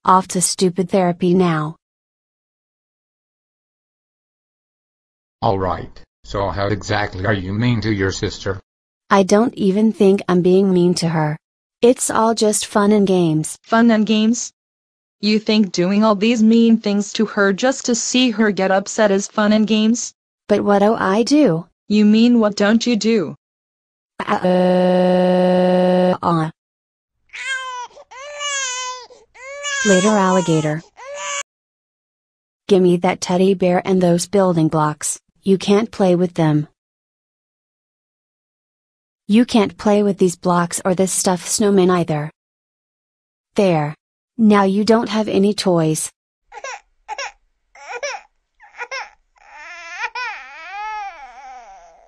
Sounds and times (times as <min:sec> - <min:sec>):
Speech: 0:00.1 - 0:01.8, 0:05.4 - 0:14.6, 0:15.2 - 0:23.4, 0:24.2 - 0:26.6, 0:29.9 - 0:30.8, 0:32.7 - 0:36.8, 0:39.3 - 0:42.4, 0:43.6 - 0:46.2.